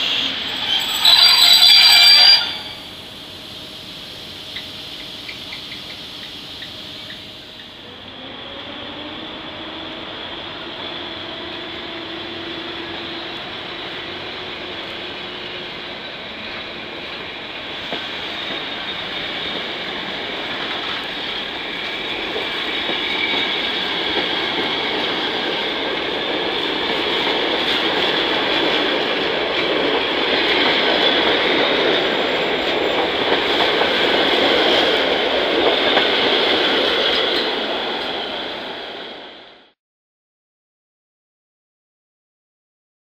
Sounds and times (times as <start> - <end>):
Railroad car, train wagon: 0.0 - 39.8
Subway, metro, underground: 0.0 - 39.8
Train: 0.0 - 39.8
Clickety-clack: 17.8 - 19.8, 21.8 - 38.2.